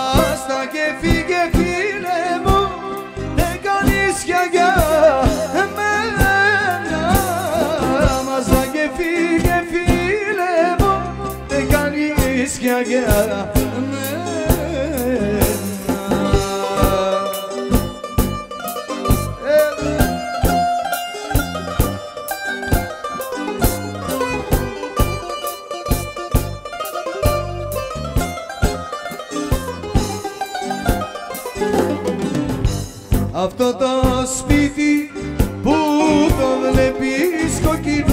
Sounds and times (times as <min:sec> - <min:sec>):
Music: 0:00.0 - 0:38.1.